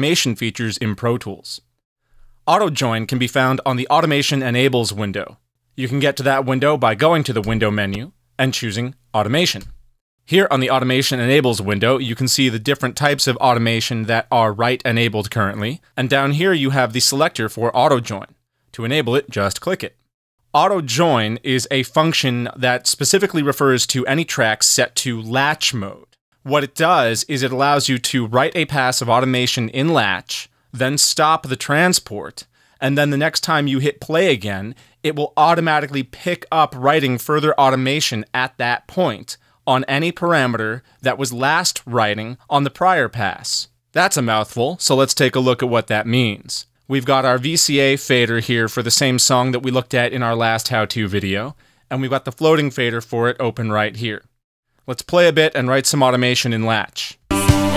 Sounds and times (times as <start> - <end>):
Speech: 0.0 - 1.7, 2.5 - 54.3, 54.9 - 57.3.